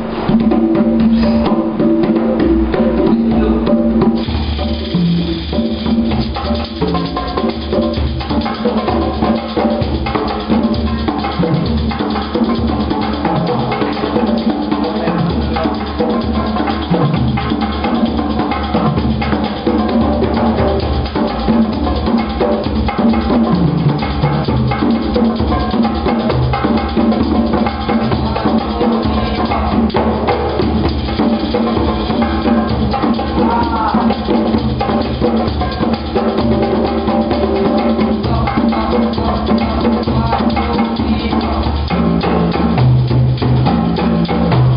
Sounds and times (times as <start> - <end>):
Percussion: 0.0 - 44.7.